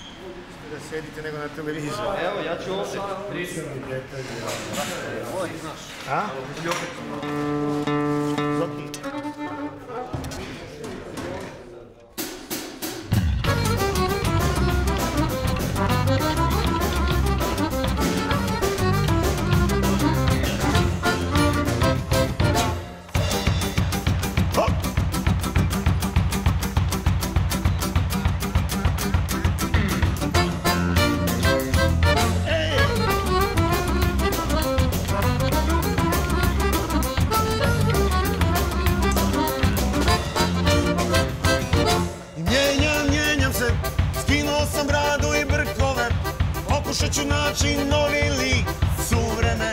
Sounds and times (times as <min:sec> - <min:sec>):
Music: 0:07.1 - 0:10.2, 0:12.2 - 0:49.7.